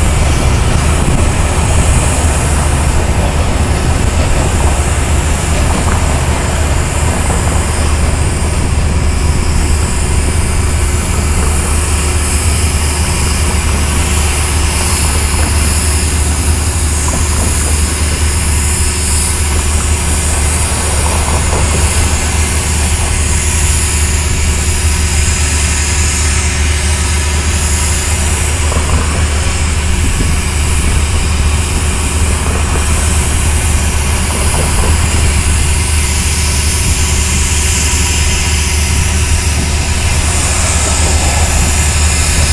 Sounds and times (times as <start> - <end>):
Railroad car, train wagon: 0.0 - 42.5
Train: 0.0 - 42.5.